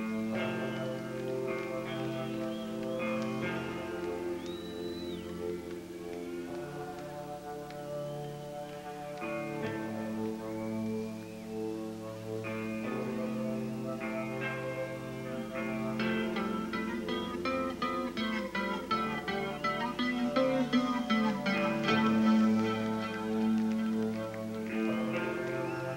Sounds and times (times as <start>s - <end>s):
Music: 0.0s - 25.9s.